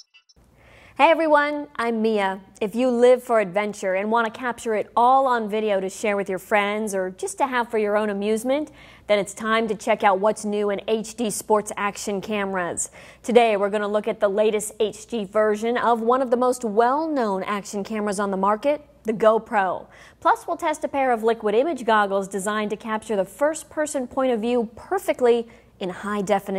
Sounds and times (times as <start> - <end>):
Speech: 1.0 - 26.5.